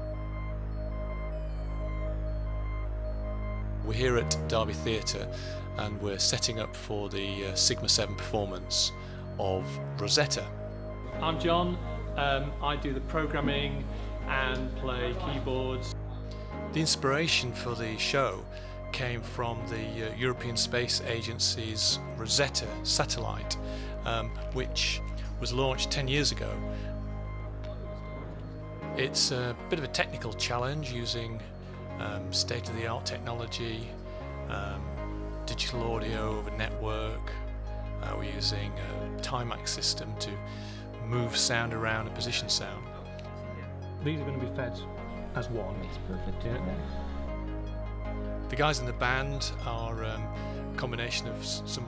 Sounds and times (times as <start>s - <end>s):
Music: 0.0s - 51.8s
Speech: 3.9s - 10.5s, 11.2s - 16.0s, 16.8s - 26.6s, 29.0s - 31.4s, 32.0s - 33.9s, 34.5s - 37.4s, 38.0s - 40.4s, 41.0s - 42.8s, 44.0s - 44.8s, 45.4s - 46.9s, 48.5s - 51.8s.